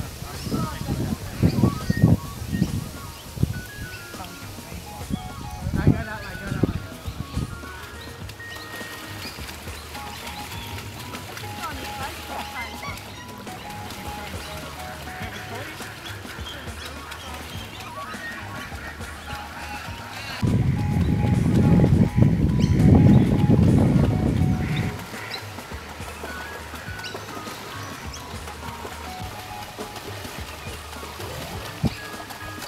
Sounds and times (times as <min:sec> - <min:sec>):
Music: 0:00.0 - 0:32.6.